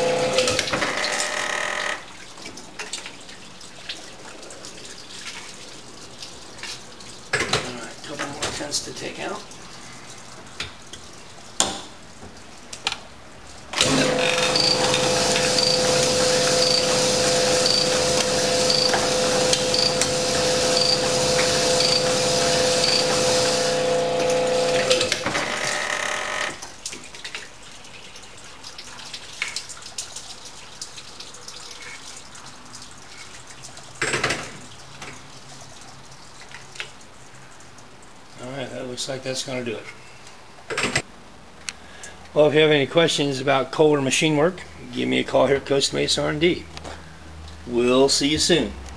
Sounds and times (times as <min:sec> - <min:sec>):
Sink (filling or washing): 0:00.0 - 0:40.2
Water tap, faucet: 0:00.0 - 0:40.2
Water: 0:00.0 - 0:48.9.